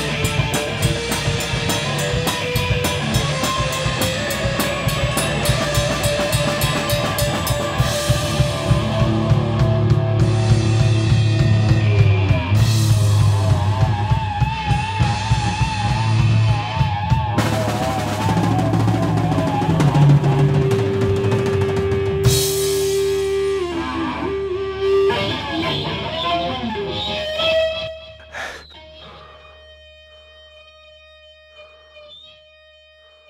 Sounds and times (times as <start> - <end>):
Electric guitar: 0.0 - 33.2.